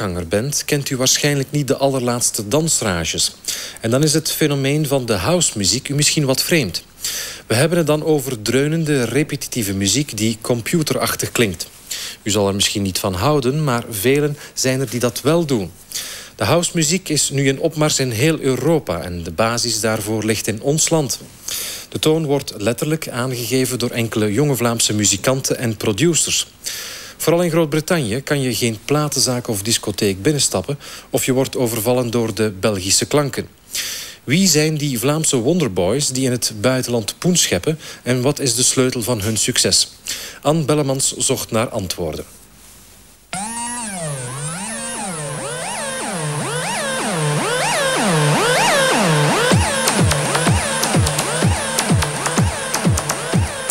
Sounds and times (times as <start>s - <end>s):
Speech: 0.0s - 6.9s, 7.5s - 15.8s, 16.4s - 21.3s, 21.9s - 26.6s, 27.2s - 33.6s, 34.3s - 42.3s.